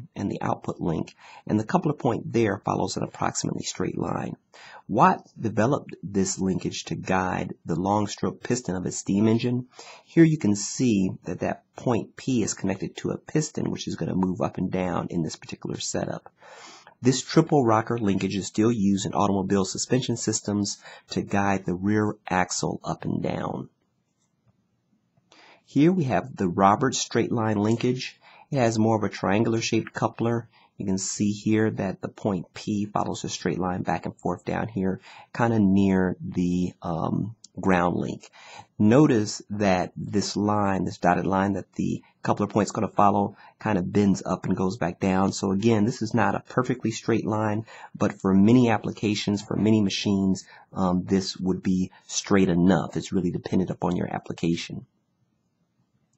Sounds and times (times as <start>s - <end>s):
Speech: 0.0s - 23.7s, 25.7s - 54.9s.